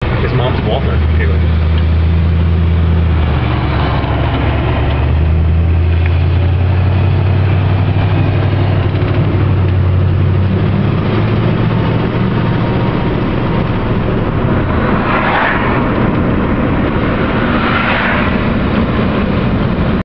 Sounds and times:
Car: 0:00.0 - 0:20.0
Engine: 0:00.0 - 0:20.0.

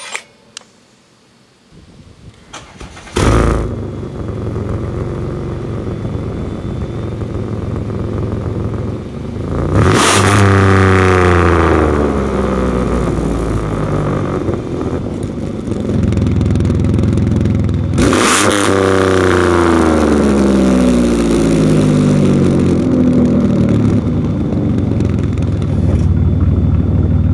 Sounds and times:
Car: 0:02.4 - 0:27.3
Accelerating, revving, vroom: 0:09.7 - 0:11.6, 0:18.0 - 0:20.9.

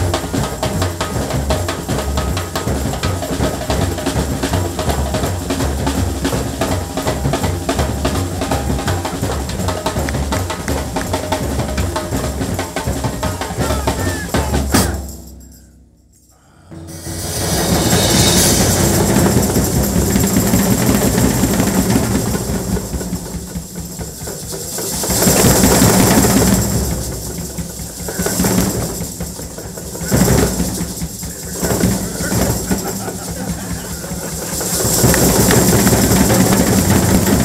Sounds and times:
Drum kit: 0:00.0 - 0:15.6, 0:16.8 - 0:37.4
Bass drum: 0:00.0 - 0:15.7, 0:16.8 - 0:37.4.

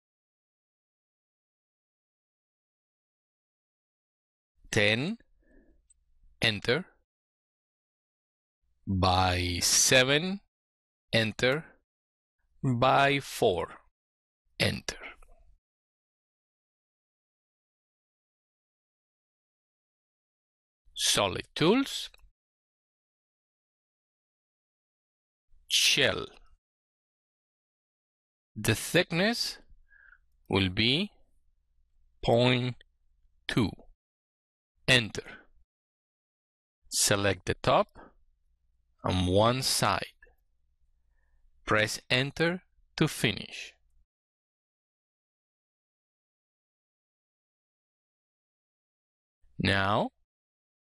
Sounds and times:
Speech: 0:04.7 - 0:05.3, 0:06.4 - 0:07.0, 0:08.9 - 0:10.5, 0:11.2 - 0:11.8, 0:12.6 - 0:13.9, 0:14.6 - 0:15.3, 0:21.0 - 0:22.2, 0:25.7 - 0:26.4, 0:28.6 - 0:29.6, 0:30.5 - 0:31.2, 0:32.2 - 0:32.8, 0:33.5 - 0:33.9, 0:34.9 - 0:35.4, 0:36.9 - 0:38.1, 0:39.0 - 0:40.2, 0:41.7 - 0:43.8, 0:49.6 - 0:50.2.

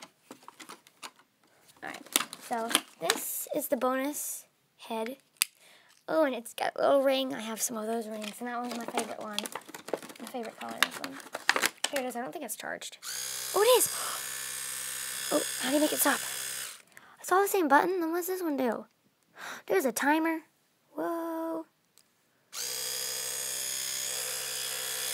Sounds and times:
Speech: 0:01.8 - 0:05.2, 0:06.1 - 0:09.5, 0:10.2 - 0:11.2, 0:11.9 - 0:13.0, 0:13.6 - 0:13.9, 0:15.3 - 0:16.2, 0:17.2 - 0:18.9, 0:19.7 - 0:21.7
Electric toothbrush: 0:13.0 - 0:16.9, 0:22.6 - 0:25.1.

